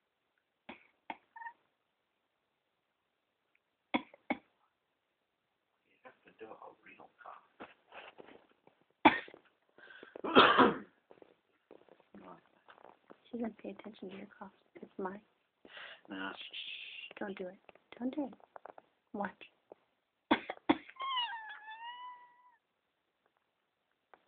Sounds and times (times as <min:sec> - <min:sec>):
Speech: 0:05.9 - 0:07.5, 0:16.1 - 0:18.4, 0:19.2 - 0:19.5.